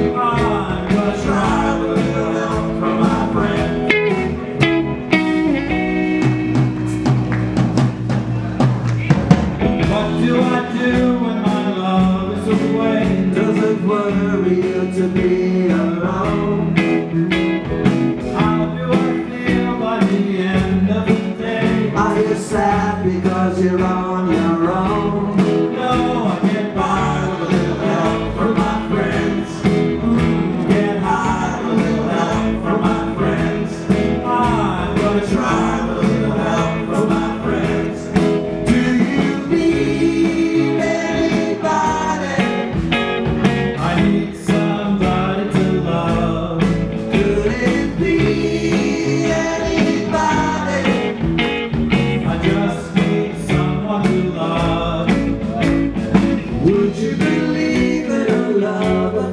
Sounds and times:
Male singing: 0.0s - 4.4s, 9.8s - 17.4s, 18.2s - 43.0s, 43.6s - 51.3s, 52.2s - 55.8s, 56.5s - 59.3s
Music: 0.0s - 59.3s.

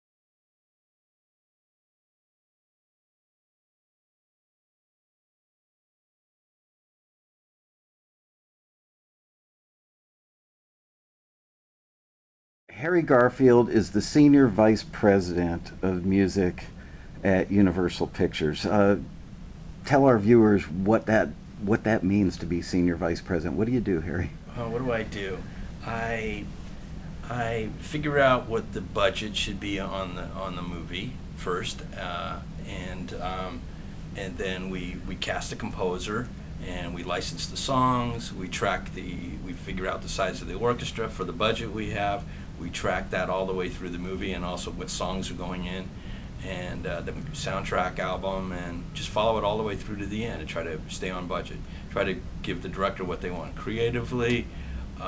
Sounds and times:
Speech: 12.7s - 19.1s, 19.8s - 26.5s, 27.2s - 33.6s, 34.2s - 55.0s.

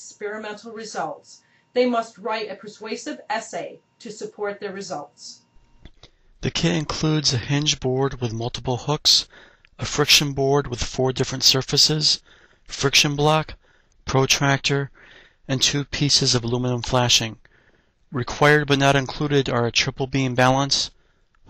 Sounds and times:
Speech: 0.0s - 5.5s, 6.4s - 17.4s, 18.1s - 21.0s.

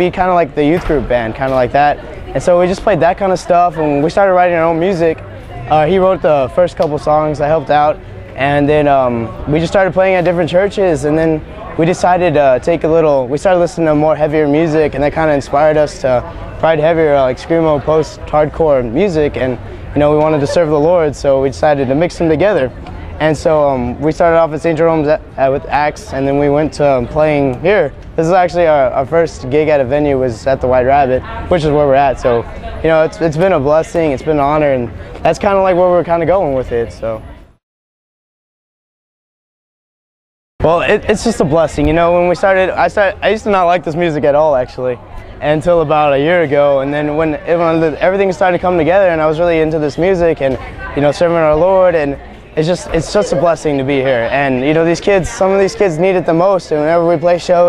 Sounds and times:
Speech: 0.0s - 37.6s, 40.6s - 57.6s.

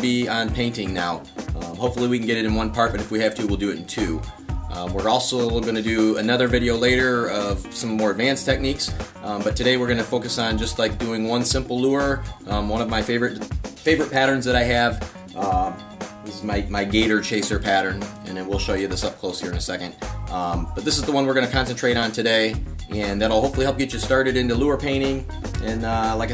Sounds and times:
Music: 0.0s - 26.3s
Speech: 0.0s - 26.3s.

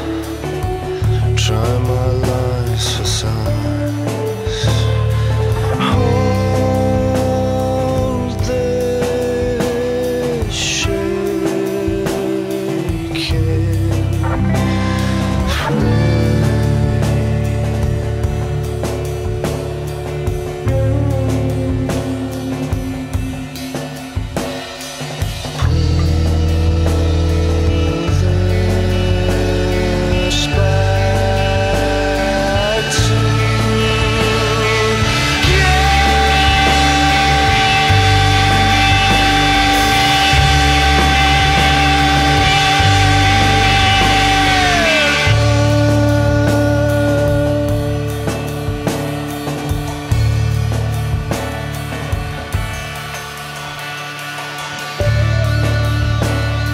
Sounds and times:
Psychedelic rock: 0.0s - 56.7s
Punk rock: 0.0s - 56.7s.

